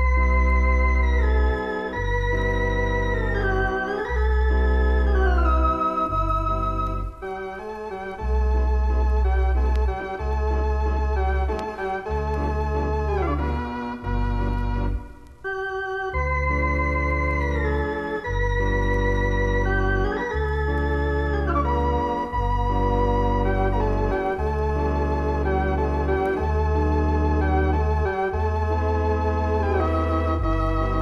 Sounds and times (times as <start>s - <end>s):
Piano: 0.0s - 31.0s.